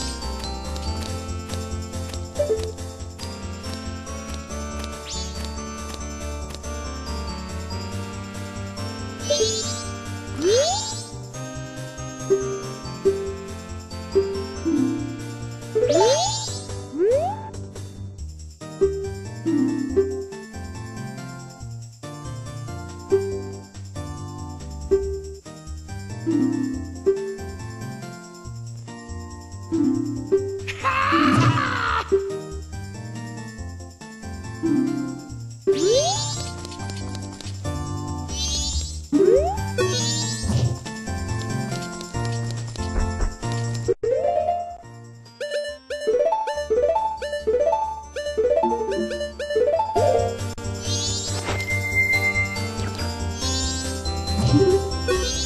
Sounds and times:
Music: 0.0 - 55.4.

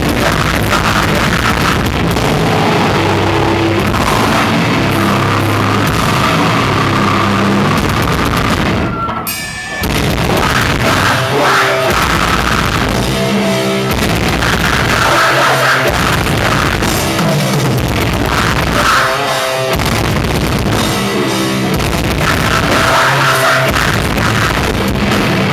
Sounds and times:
Music: 0.0 - 25.5.

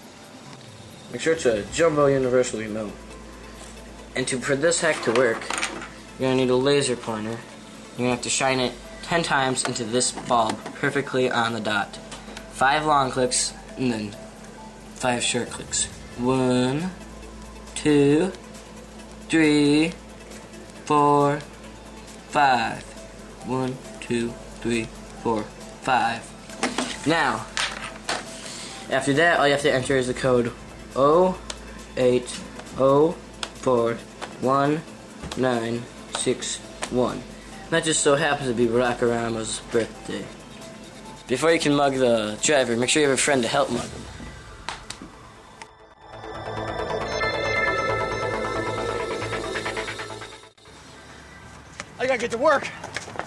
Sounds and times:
Music: 0.0 - 51.4
Speech: 1.1 - 3.0, 4.2 - 5.5, 6.2 - 7.4, 8.0 - 12.0, 12.6 - 14.2, 15.0 - 17.0, 20.9 - 21.5, 23.5 - 26.3, 28.9 - 31.4, 32.0 - 40.3, 41.3 - 43.9, 52.0 - 52.8.

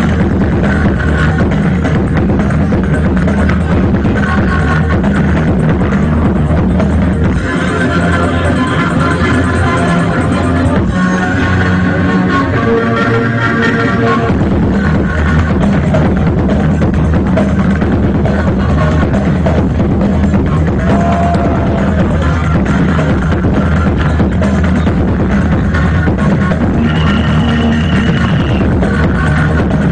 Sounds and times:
Techno: 0.0 - 29.9.

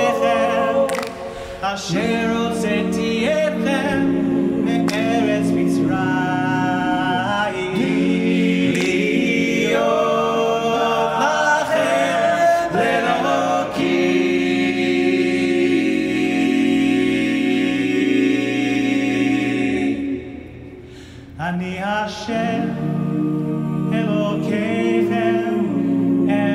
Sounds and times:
A capella: 0.0 - 26.5
Gospel music: 0.0 - 26.5.

